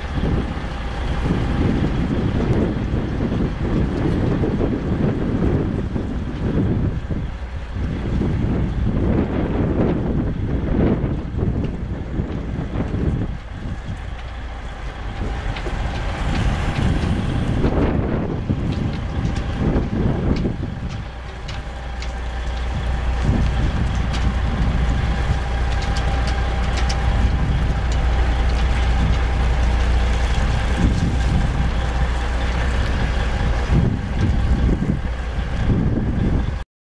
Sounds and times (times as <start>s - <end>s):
Wind noise (microphone): 0.0s - 14.4s, 15.0s - 36.6s.